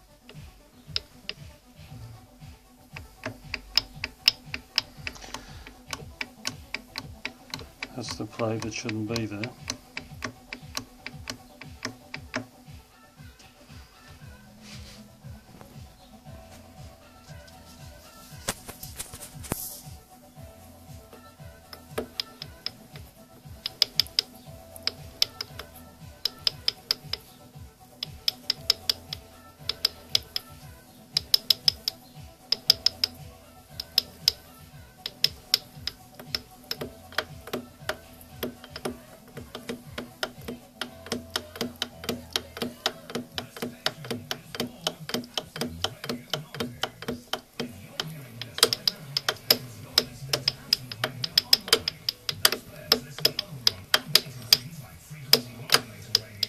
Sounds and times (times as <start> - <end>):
Music: 0.0 - 56.4.